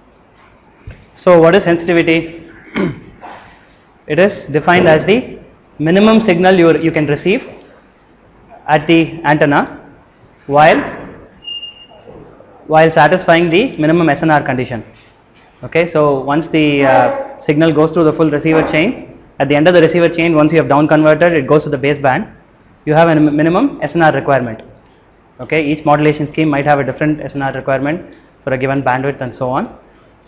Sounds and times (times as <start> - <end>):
Speech: 1.2 - 2.5, 4.1 - 7.6, 8.6 - 9.8, 10.5 - 11.2, 12.6 - 15.0, 15.6 - 24.7, 25.4 - 29.8.